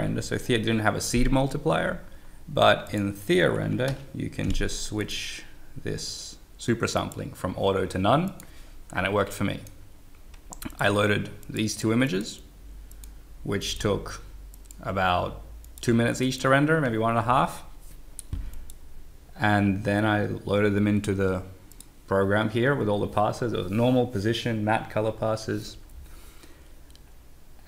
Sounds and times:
Speech: 0.0s - 9.8s, 10.6s - 12.5s, 13.4s - 17.7s, 19.4s - 25.8s.

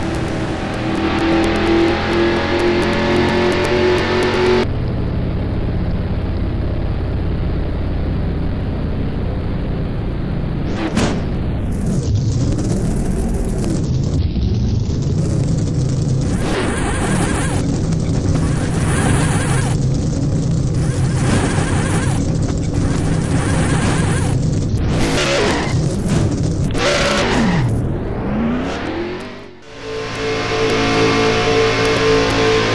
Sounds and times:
Car: 0.0s - 32.7s.

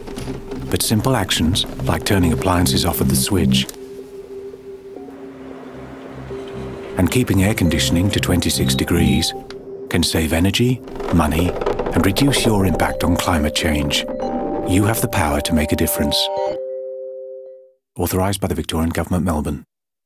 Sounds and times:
Music: 0.1s - 17.7s
Speech: 0.7s - 3.7s, 7.0s - 14.1s, 14.7s - 16.5s, 18.0s - 19.7s.

